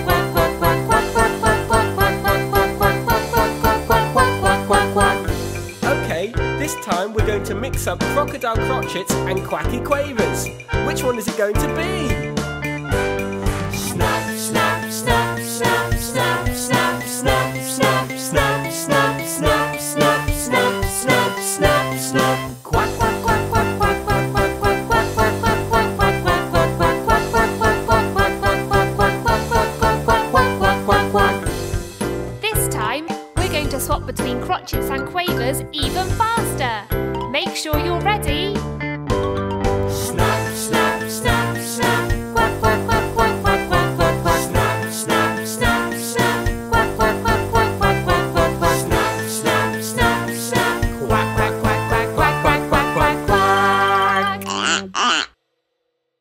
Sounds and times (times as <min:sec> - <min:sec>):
Music for children: 0:00.0 - 0:55.3.